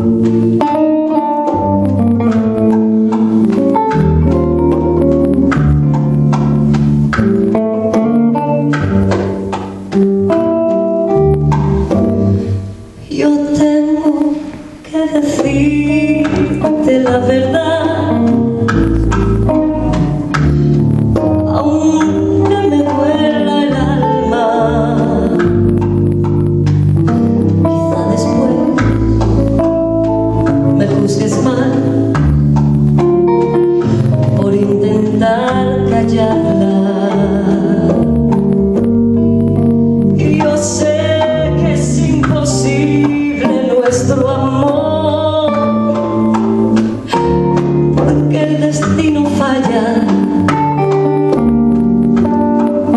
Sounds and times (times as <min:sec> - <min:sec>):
Cello: 0:00.0 - 0:52.9
Double bass: 0:00.0 - 0:52.9
Guitar: 0:00.0 - 0:52.9
Jazz: 0:00.0 - 0:52.9
Keyboard (musical): 0:00.0 - 0:52.9.